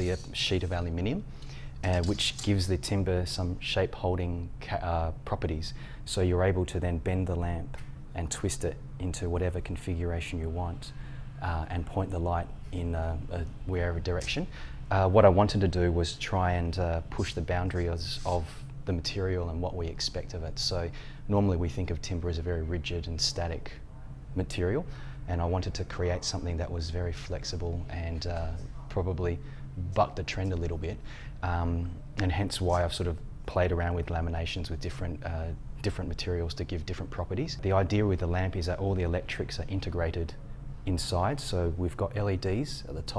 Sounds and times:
Speech: 0.0s - 23.8s, 24.4s - 43.1s.

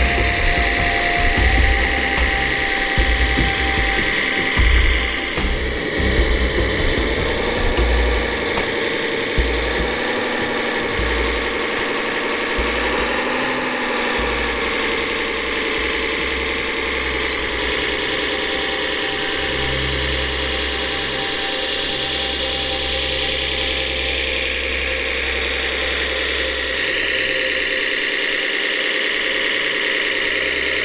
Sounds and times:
Music: 0.0s - 30.8s
Truck: 0.0s - 30.8s.

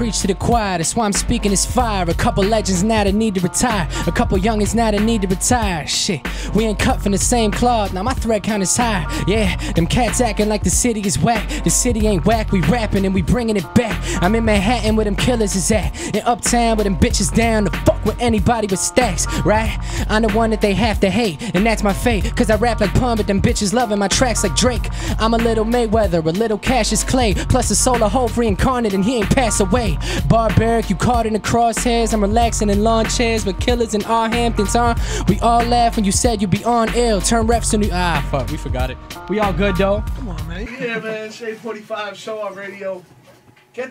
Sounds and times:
Music: 0.0s - 43.9s.

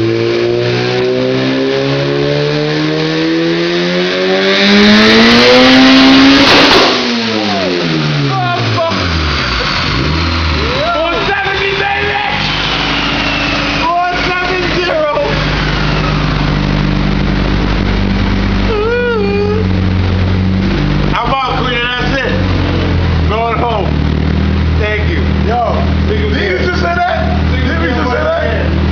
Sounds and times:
Speech: 7.5s - 9.0s, 10.7s - 12.4s, 13.8s - 15.4s, 21.2s - 22.4s, 23.3s - 24.0s, 24.8s - 28.8s.

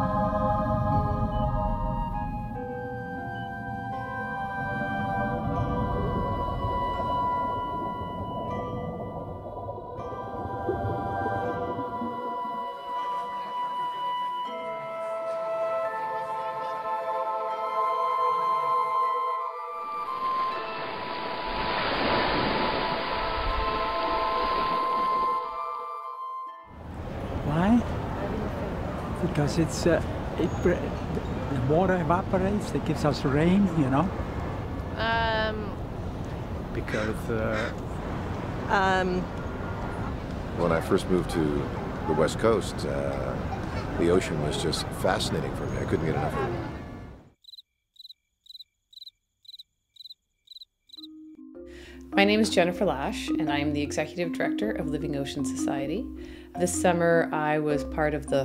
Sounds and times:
Music: 0.0s - 21.9s, 22.9s - 26.9s, 51.0s - 58.4s.

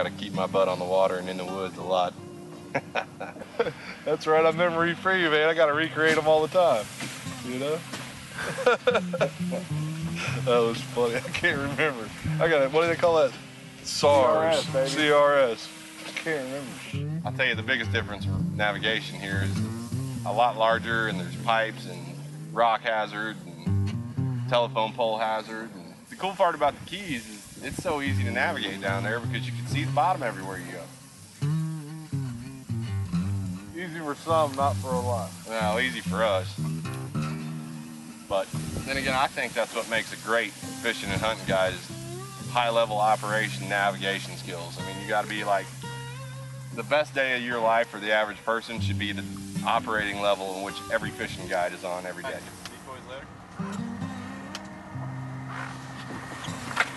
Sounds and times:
Speech: 0.0s - 2.2s, 4.1s - 7.8s, 10.3s - 19.6s, 20.3s - 23.7s, 24.5s - 30.9s, 33.8s - 36.6s, 38.3s - 41.9s, 42.5s - 45.7s, 46.8s - 53.2s
Music: 0.0s - 52.7s, 53.5s - 56.9s.

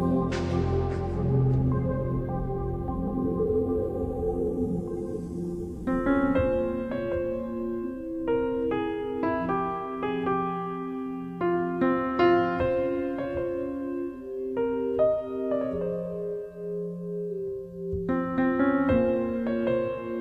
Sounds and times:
Music: 0.0s - 20.2s.

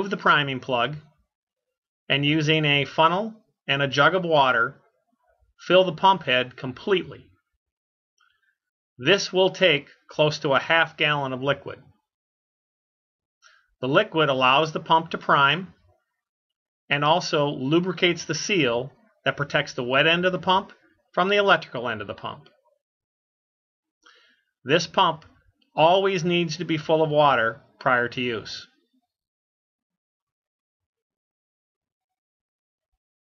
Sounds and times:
Speech: 0.0s - 1.2s, 2.1s - 4.8s, 5.6s - 7.4s, 9.0s - 12.0s, 13.8s - 15.8s, 16.9s - 22.6s, 24.7s - 28.8s.

